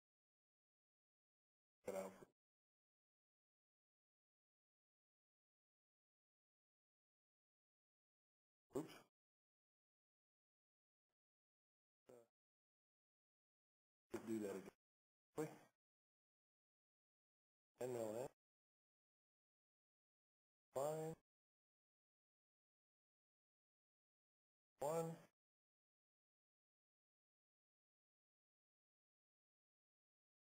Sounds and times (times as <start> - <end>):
Speech: 1.9 - 2.3, 8.8 - 9.1, 12.1 - 12.3, 14.2 - 14.8, 15.4 - 15.7, 17.8 - 18.4, 20.8 - 21.2, 24.8 - 25.3.